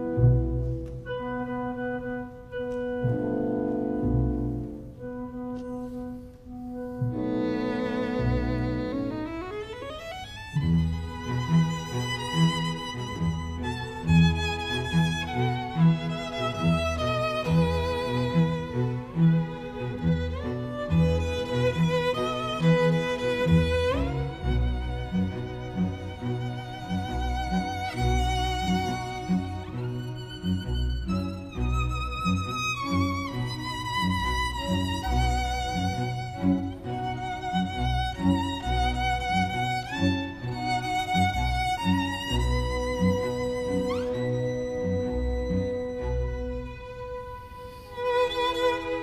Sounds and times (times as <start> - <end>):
Cello: 0.0 - 49.0
Violin, fiddle: 0.0 - 49.0.